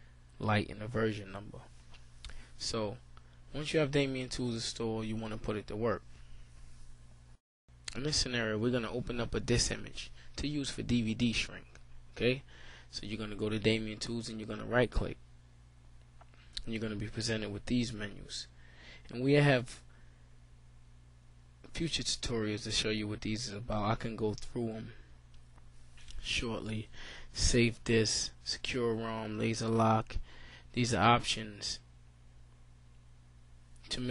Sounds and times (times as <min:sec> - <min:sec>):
Speech: 0:00.4 - 0:01.7, 0:02.6 - 0:06.0, 0:07.9 - 0:15.2, 0:16.6 - 0:18.5, 0:19.1 - 0:19.9, 0:21.7 - 0:25.0, 0:26.1 - 0:30.2, 0:30.8 - 0:31.9, 0:33.9 - 0:34.1.